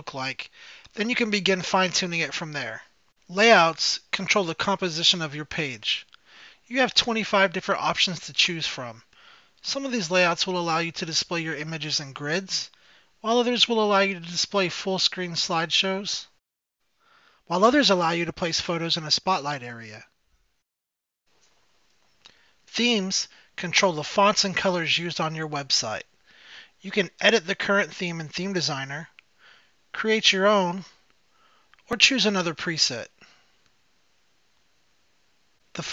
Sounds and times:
Speech: 0:00.0 - 0:06.1, 0:06.7 - 0:16.4, 0:17.5 - 0:20.1, 0:22.7 - 0:26.1, 0:26.8 - 0:29.2, 0:29.9 - 0:31.0, 0:31.9 - 0:33.3.

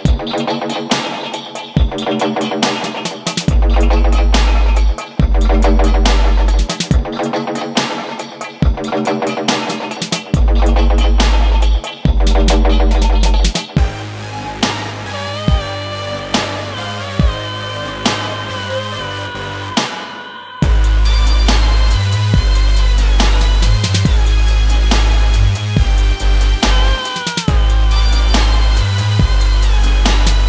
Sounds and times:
Music: 0:00.0 - 0:30.4.

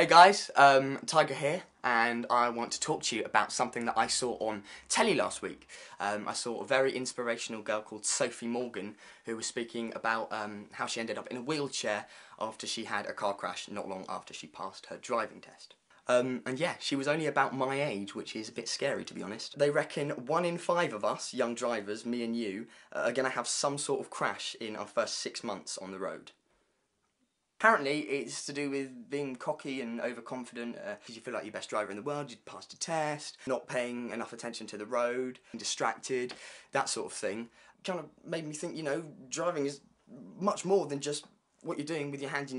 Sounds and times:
Speech: 0:00.0 - 0:26.4, 0:27.6 - 0:42.5.

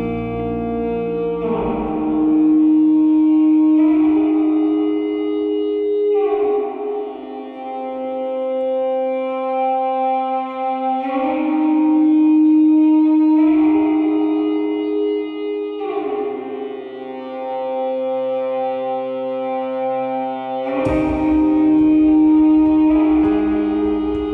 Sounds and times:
Effects unit: 0:00.0 - 0:24.3.

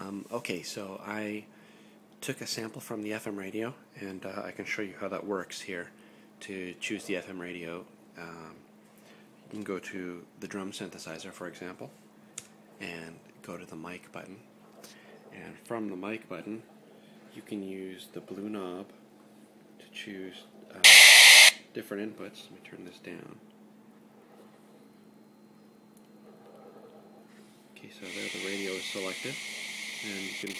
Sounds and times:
Speech: 0:00.0 - 0:01.5, 0:02.2 - 0:08.6, 0:09.5 - 0:12.0, 0:12.8 - 0:14.5, 0:15.3 - 0:16.7, 0:17.4 - 0:19.0, 0:19.8 - 0:20.9, 0:21.7 - 0:23.4, 0:27.8 - 0:29.4, 0:30.0 - 0:30.6
Radio: 0:20.8 - 0:21.6, 0:28.0 - 0:30.6.

